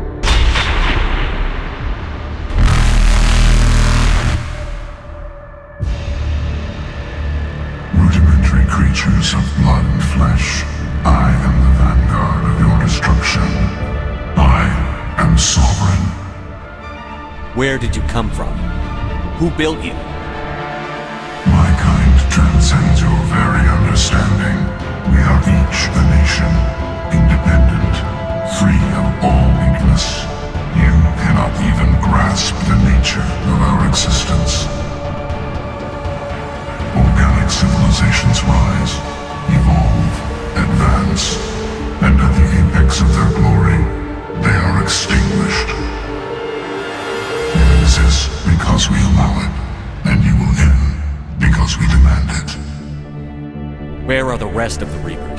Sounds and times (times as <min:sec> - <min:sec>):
Background music: 0:00.0 - 0:55.3
Speech: 0:07.9 - 0:16.3, 0:17.4 - 0:20.1, 0:21.4 - 0:34.9, 0:36.8 - 0:46.0, 0:47.6 - 0:52.8, 0:54.0 - 0:55.3.